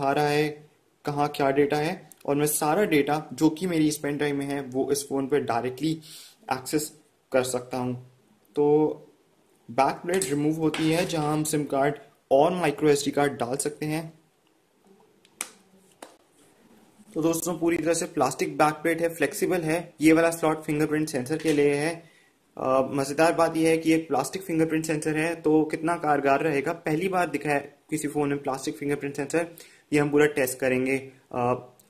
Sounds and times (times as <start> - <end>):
Speech: 0.0 - 9.1, 9.7 - 14.2, 17.1 - 22.0, 22.6 - 31.8
Inside, small room: 0.0 - 31.8.